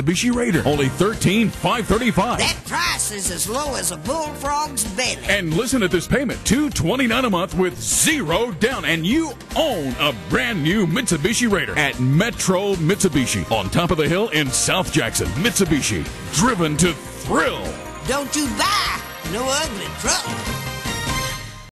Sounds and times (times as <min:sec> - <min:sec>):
Speech: 0:00.0 - 0:20.3
Music: 0:00.0 - 0:21.7.